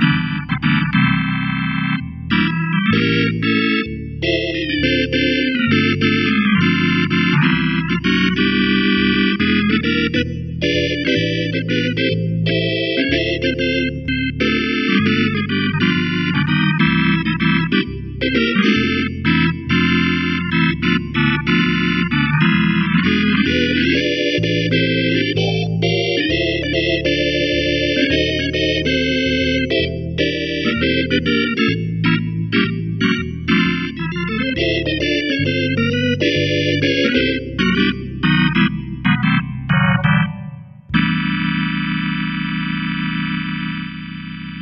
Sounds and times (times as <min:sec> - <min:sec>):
Electric piano: 0:00.0 - 0:44.6.